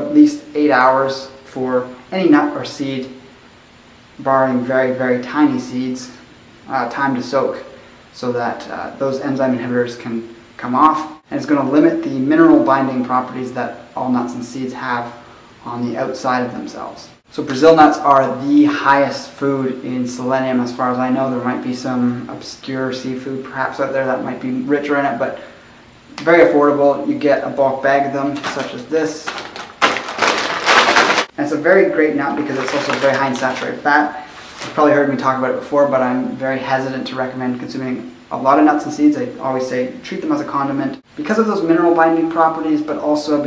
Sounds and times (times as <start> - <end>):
Speech: 0.0 - 3.2, 4.2 - 29.5, 31.3 - 43.4
Inside, small room: 0.0 - 43.4.